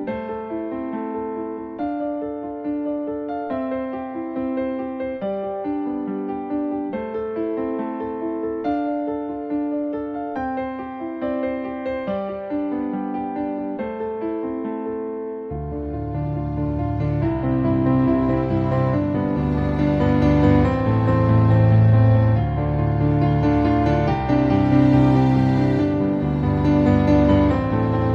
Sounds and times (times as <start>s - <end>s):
Electric piano: 0.0s - 28.1s.